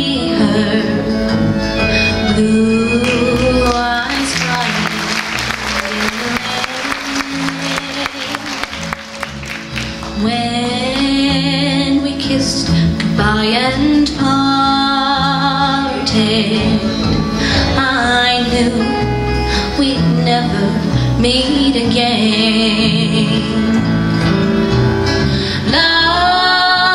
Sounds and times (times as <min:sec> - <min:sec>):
Music: 0:00.0 - 0:26.9.